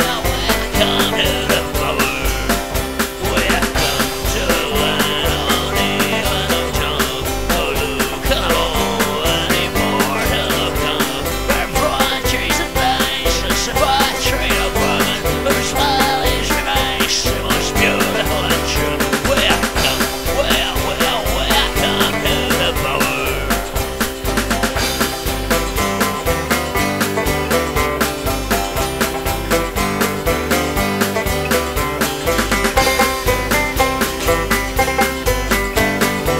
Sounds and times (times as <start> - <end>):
Music: 0.0 - 36.3.